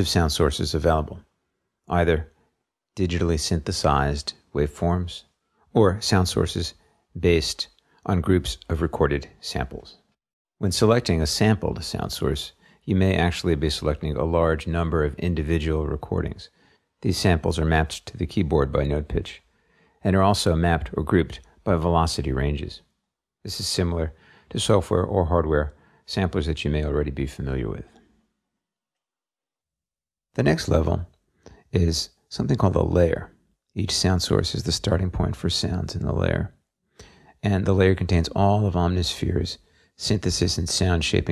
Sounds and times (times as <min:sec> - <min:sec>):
Speech: 0:00.0 - 0:01.3, 0:01.9 - 0:02.4, 0:03.0 - 0:22.9, 0:23.5 - 0:28.0, 0:30.4 - 0:36.6, 0:37.4 - 0:41.3.